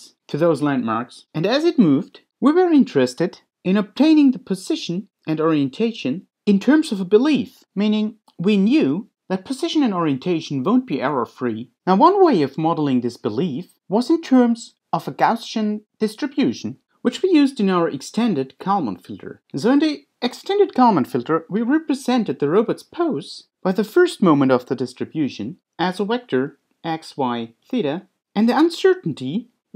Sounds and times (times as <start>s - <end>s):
Speech: 0.0s - 29.6s.